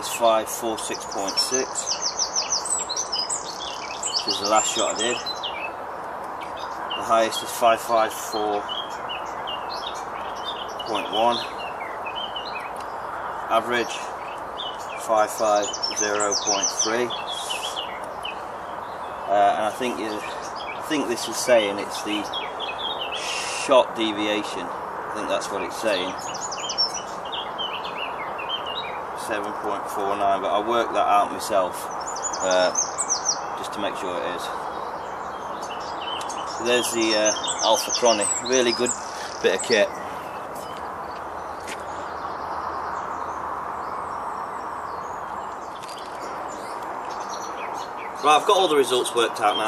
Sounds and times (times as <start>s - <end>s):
Speech: 0.0s - 1.8s, 4.2s - 5.3s, 7.0s - 8.6s, 10.9s - 11.5s, 13.5s - 14.1s, 15.0s - 17.8s, 19.3s - 22.3s, 23.2s - 26.2s, 29.2s - 32.8s, 33.6s - 34.6s, 36.6s - 40.0s, 48.2s - 49.6s
Outside, rural or natural: 0.0s - 49.6s.